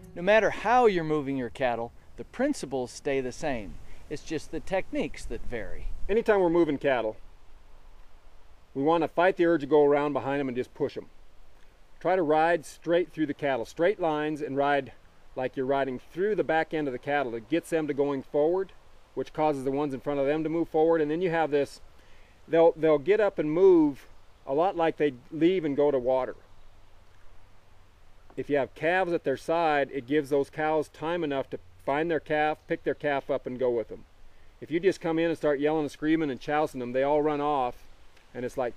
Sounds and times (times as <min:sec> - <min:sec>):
Speech: 0:00.0 - 0:07.2, 0:08.8 - 0:11.1, 0:12.0 - 0:21.8, 0:22.5 - 0:26.4, 0:28.4 - 0:34.0, 0:34.6 - 0:38.7.